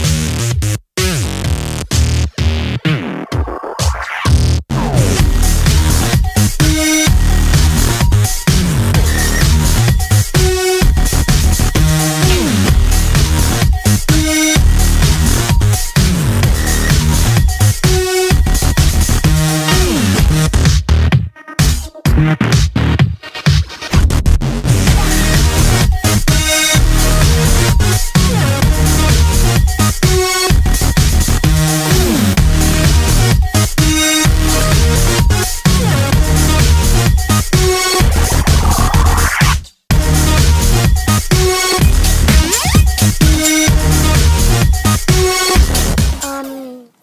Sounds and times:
Dubstep: 0.0 - 46.8.

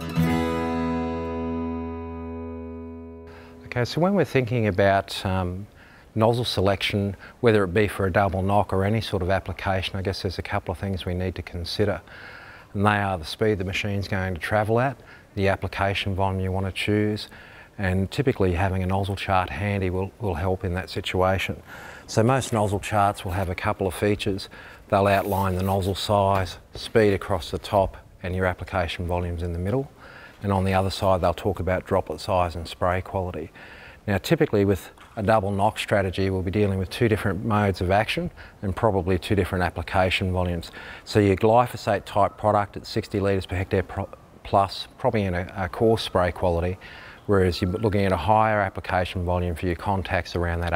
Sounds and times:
Speech: 3.6 - 12.1, 12.8 - 50.7.

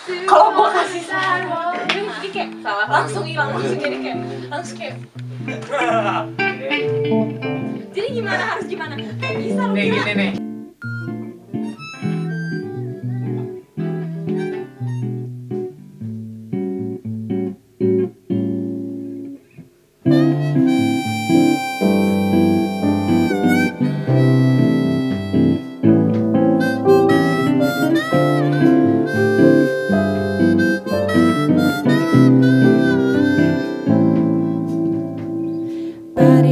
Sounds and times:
Music: 1.2 - 36.5
Electronic tuner: 4.8 - 36.5.

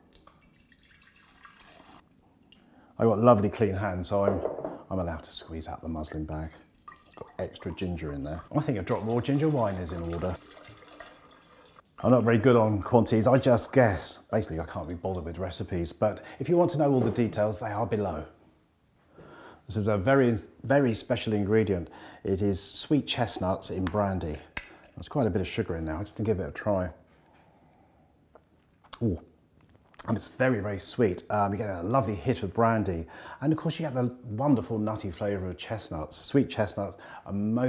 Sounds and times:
Speech: 3.0 - 6.6, 7.2 - 10.4, 12.0 - 18.4, 19.7 - 27.0, 29.0 - 29.3, 30.0 - 37.6.

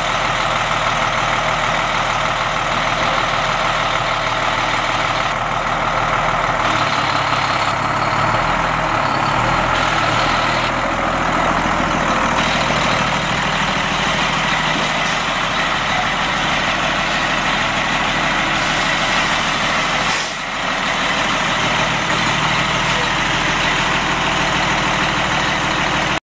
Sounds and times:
Air brake: 20.0 - 20.4.

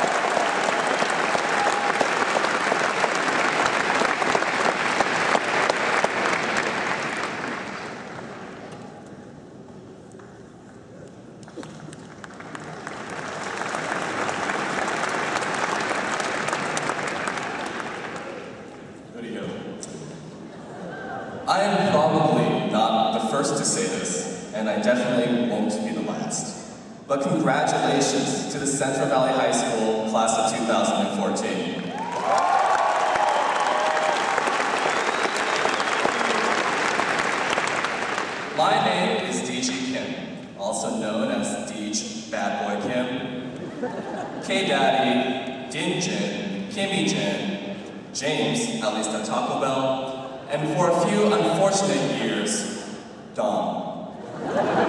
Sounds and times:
Male speech, man speaking: 19.2 - 19.7, 21.5 - 31.8, 38.6 - 43.4, 44.4 - 47.5, 48.2 - 52.7, 53.4 - 53.9.

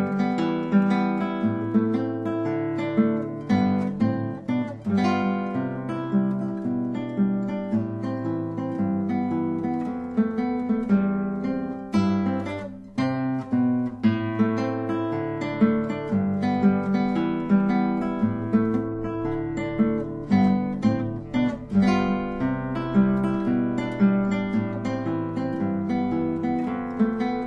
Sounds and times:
Music: 0.0 - 27.4.

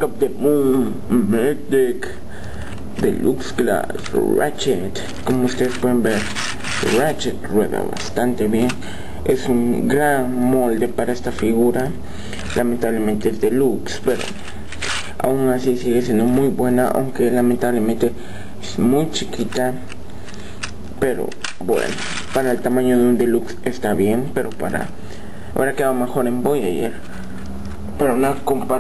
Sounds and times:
Speech: 0.0 - 2.2, 3.0 - 14.4, 15.2 - 19.9, 21.0 - 25.0, 25.6 - 27.0, 28.0 - 28.8.

